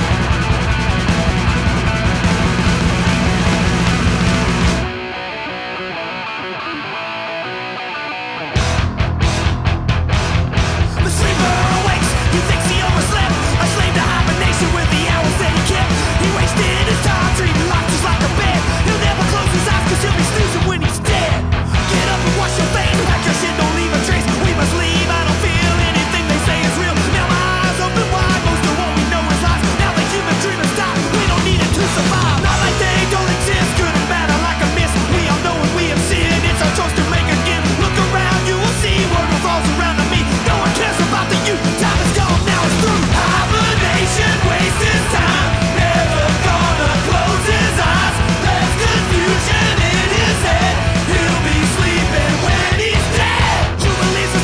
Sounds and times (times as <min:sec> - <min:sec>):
Music: 0:00.0 - 0:54.4.